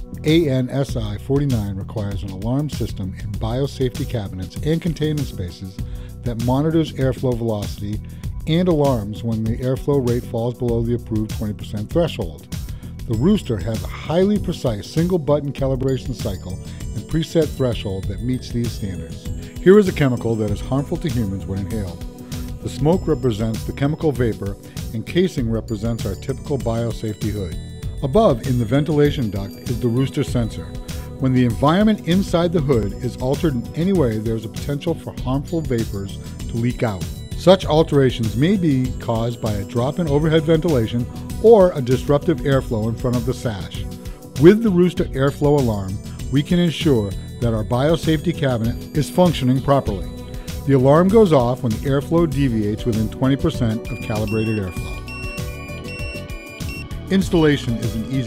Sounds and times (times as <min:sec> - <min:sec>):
Music: 0:00.0 - 0:58.2
Speech: 0:00.2 - 0:12.5, 0:13.1 - 0:22.0, 0:22.6 - 0:54.9, 0:57.1 - 0:58.2.